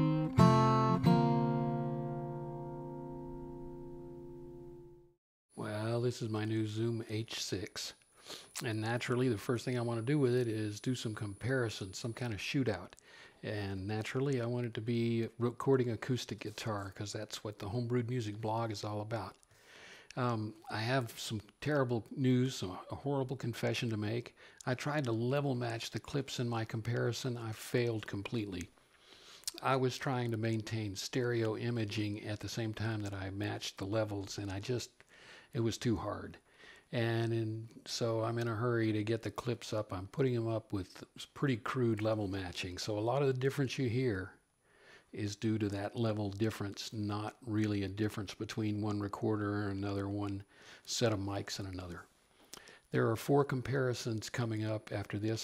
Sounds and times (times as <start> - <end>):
Speech: 5.6 - 8.0, 8.6 - 19.4, 20.1 - 28.7, 29.5 - 44.4, 45.1 - 52.1, 52.9 - 55.4.